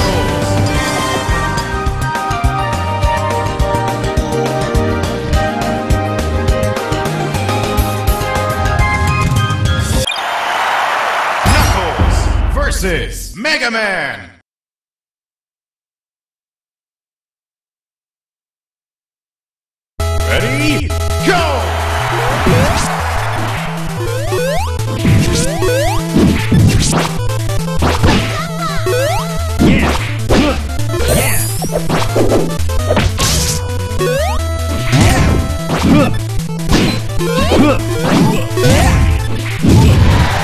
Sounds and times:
Music: 0.0s - 10.1s, 20.0s - 40.4s.

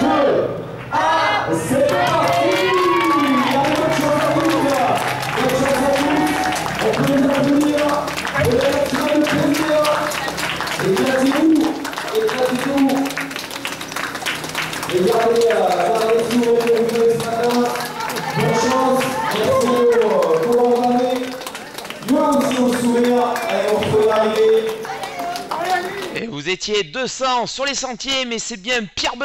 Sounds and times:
Outside, urban or manmade: 0.0s - 26.4s
Run: 1.9s - 26.2s.

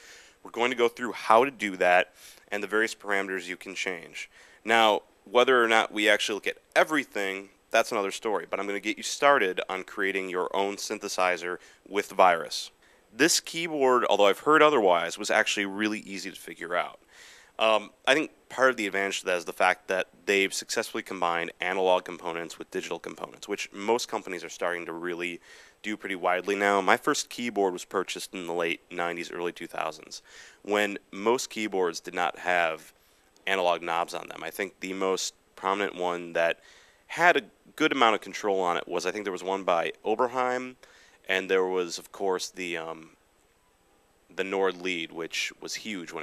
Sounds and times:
Speech: 0.4s - 17.0s, 17.6s - 43.2s, 44.3s - 46.2s.

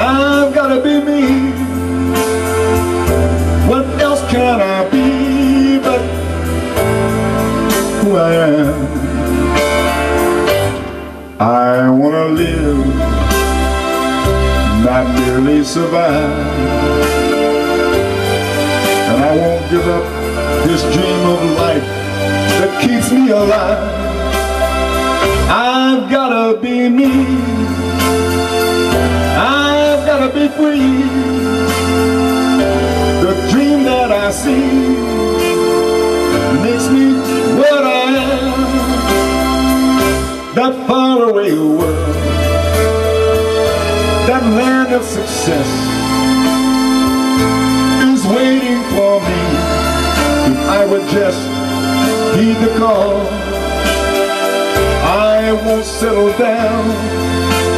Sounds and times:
Male singing: 0.0s - 1.8s, 3.6s - 6.2s, 7.8s - 9.2s, 11.4s - 13.5s, 14.7s - 17.2s, 19.1s - 21.9s, 22.5s - 24.4s, 25.5s - 28.1s, 29.4s - 31.8s, 33.2s - 39.4s, 40.5s - 42.9s, 44.2s - 45.9s, 48.0s - 54.0s, 55.0s - 57.7s
Music: 0.0s - 57.7s.

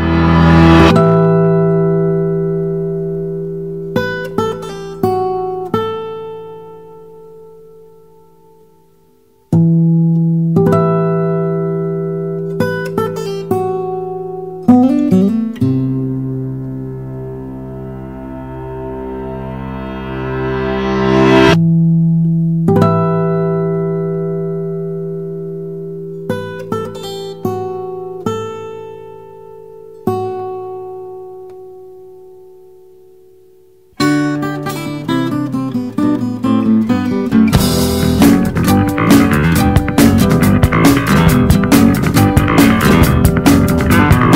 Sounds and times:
Electronic tuner: 0.0s - 44.3s
Music: 0.0s - 44.3s.

